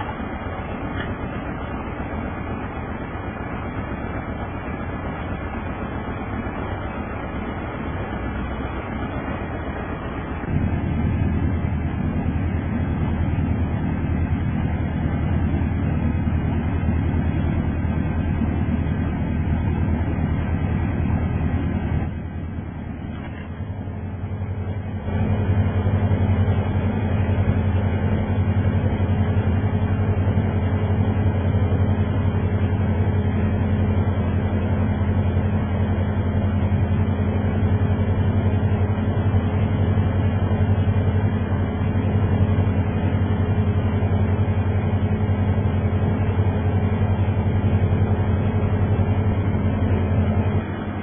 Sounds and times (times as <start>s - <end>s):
Vehicle: 0.0s - 51.0s.